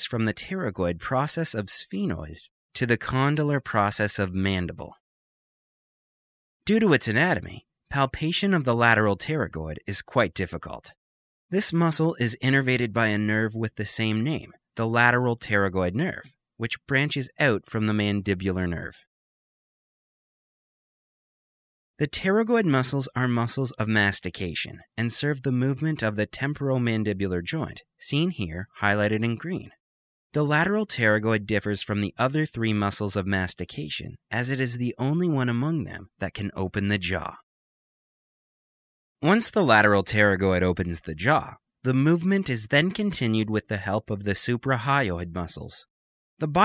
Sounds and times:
Narration, monologue: 0.0 - 5.0, 6.6 - 19.1, 22.0 - 37.5, 39.2 - 46.6.

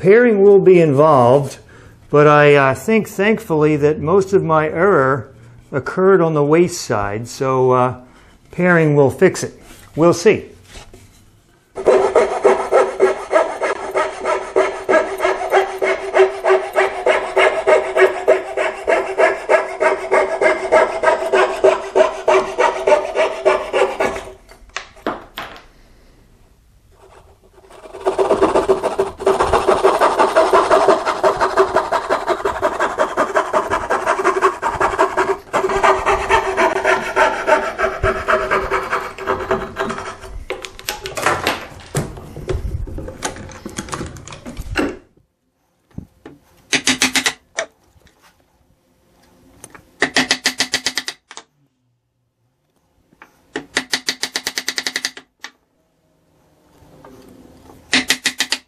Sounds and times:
Rub: 11.8 - 24.3, 27.0 - 40.2
Sawing: 11.8 - 24.4, 27.0 - 40.6, 57.9 - 58.6
Wood: 11.8 - 25.7, 27.0 - 45.0, 57.9 - 58.6.

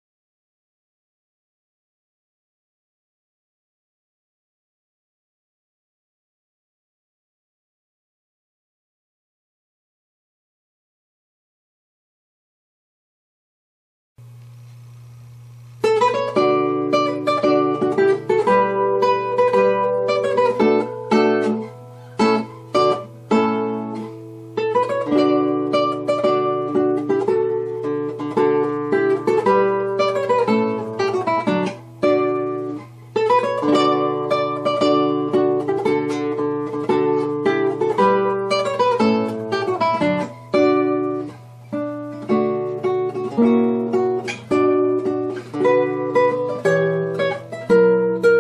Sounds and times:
Strum: 14.2 - 48.4.

